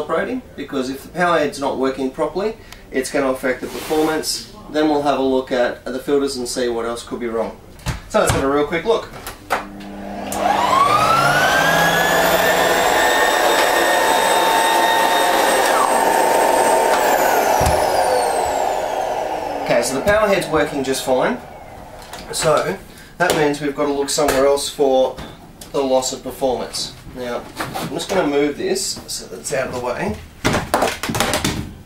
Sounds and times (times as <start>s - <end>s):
Speech: 0.0s - 9.1s, 19.6s - 21.4s, 22.3s - 30.2s.